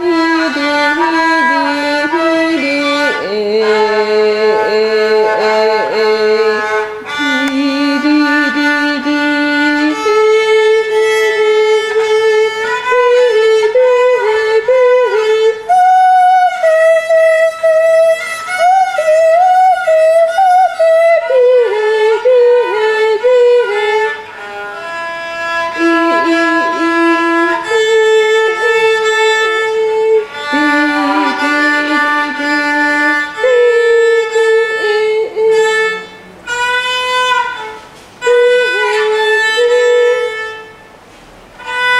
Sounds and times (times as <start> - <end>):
Violin, fiddle: 0.0 - 41.0, 41.6 - 42.0.